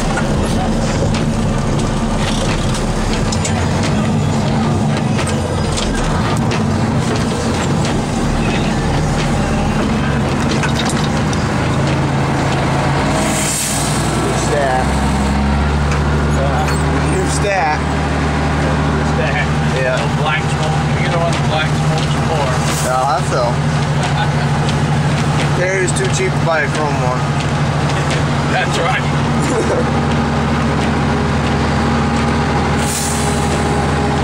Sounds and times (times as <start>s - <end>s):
Truck: 0.0s - 34.2s
Speech: 14.2s - 15.0s, 16.3s - 17.8s, 18.6s - 24.6s, 25.5s - 27.3s, 28.0s - 29.9s.